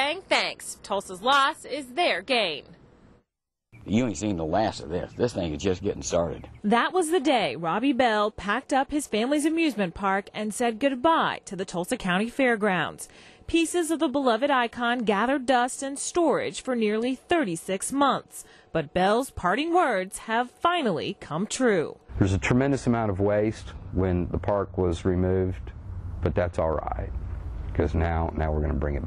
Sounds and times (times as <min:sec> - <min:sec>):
Speech: 0:03.9 - 0:25.6, 0:26.2 - 0:27.1, 0:27.8 - 0:29.0.